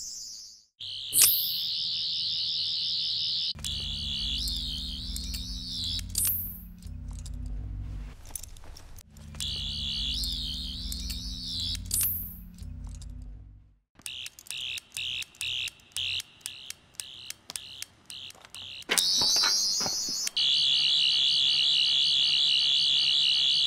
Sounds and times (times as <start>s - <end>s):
Sound effect: 0.0s - 8.5s, 9.1s - 23.6s.